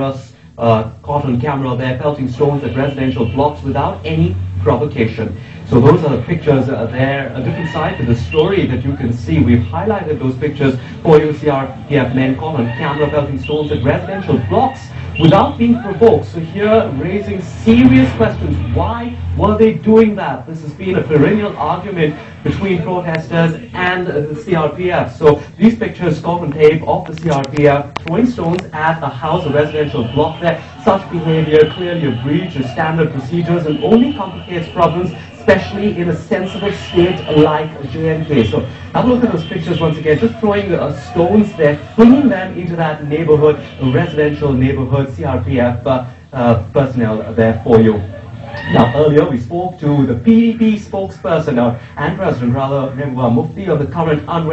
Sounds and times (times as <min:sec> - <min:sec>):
Speech: 0:00.0 - 0:54.5.